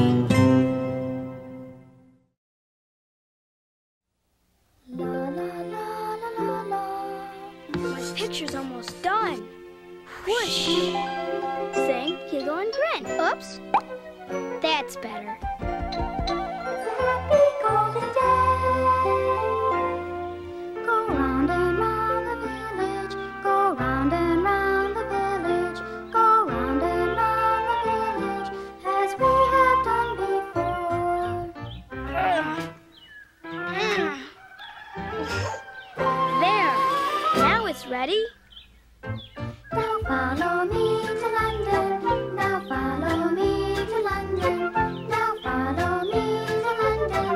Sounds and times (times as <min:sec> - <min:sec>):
Music: 0:00.0 - 0:02.3, 0:04.9 - 0:34.4, 0:35.0 - 0:38.3, 0:39.0 - 0:47.3
Speech: 0:07.8 - 0:09.4, 0:11.8 - 0:13.6, 0:14.6 - 0:15.3, 0:36.4 - 0:36.8, 0:37.4 - 0:38.4.